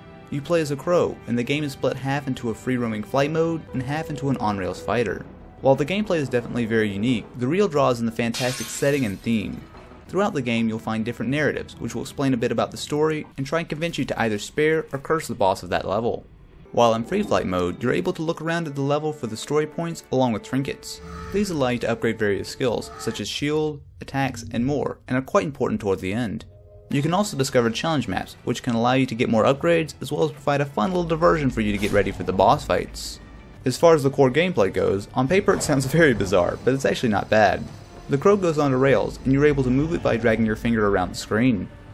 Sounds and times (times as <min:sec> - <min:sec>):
Music: 0:00.0 - 0:41.9
Speech: 0:00.3 - 0:41.7.